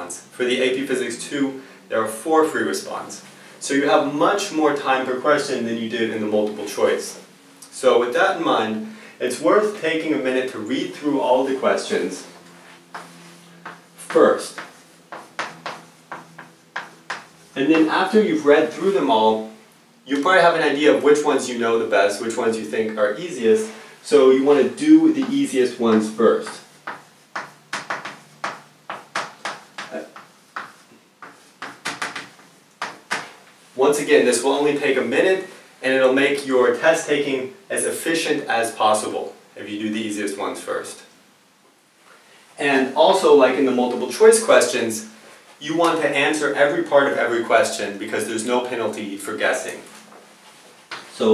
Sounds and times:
Speech: 0.0 - 12.4, 14.0 - 14.6, 17.6 - 26.7, 29.9 - 30.2, 33.8 - 41.2, 42.6 - 50.0, 51.1 - 51.3
Inside, small room: 0.0 - 51.3.

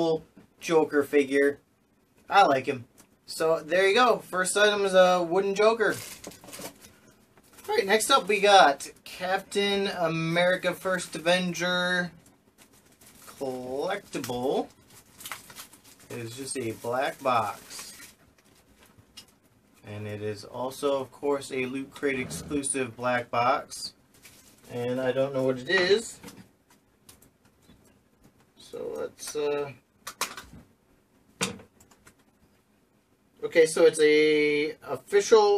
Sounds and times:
Speech: 0.0 - 1.6, 2.3 - 6.1, 7.6 - 12.2, 13.3 - 14.7, 16.1 - 18.0, 19.8 - 24.0, 24.7 - 26.3, 28.6 - 29.8, 33.4 - 35.5
Inside, small room: 0.0 - 35.5.

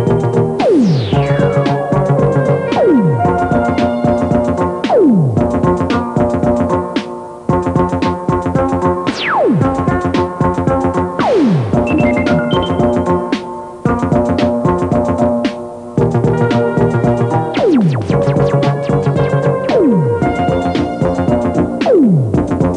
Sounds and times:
Music: 0.0 - 22.7.

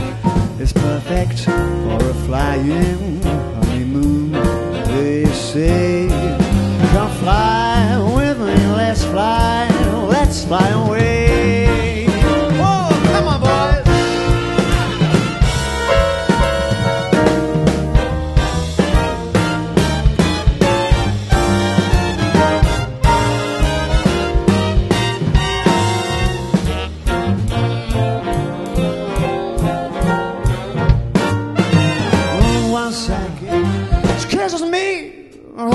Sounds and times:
Jazz: 0.0 - 35.7
Ska: 0.0 - 35.7
Song: 0.0 - 35.7
Swing music: 0.0 - 35.7
Pop music: 4.9 - 17.4, 29.5 - 35.7.

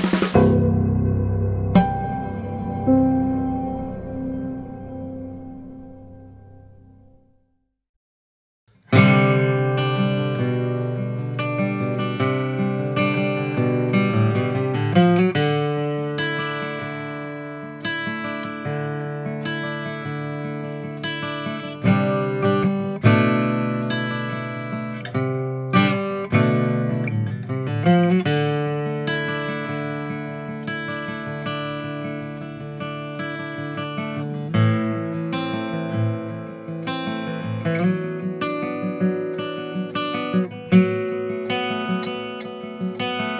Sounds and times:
Acoustic guitar: 0.0 - 7.2, 8.7 - 43.3.

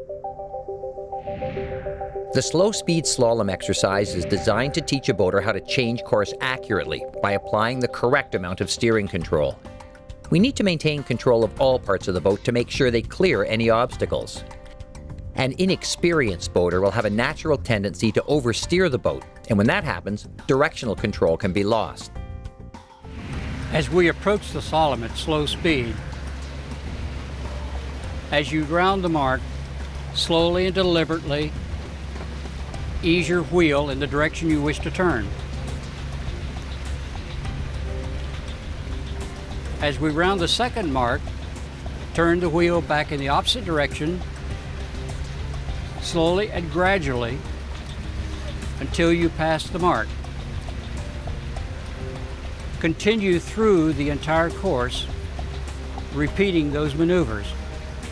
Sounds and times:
Music: 0.0 - 58.1
Speech: 2.4 - 9.6, 10.3 - 14.4, 15.4 - 22.1, 23.7 - 26.0, 28.3 - 29.4, 30.2 - 31.5, 33.0 - 35.3, 39.8 - 41.2, 42.2 - 44.2, 46.0 - 47.4, 48.8 - 50.1, 52.8 - 55.1, 56.1 - 57.6.

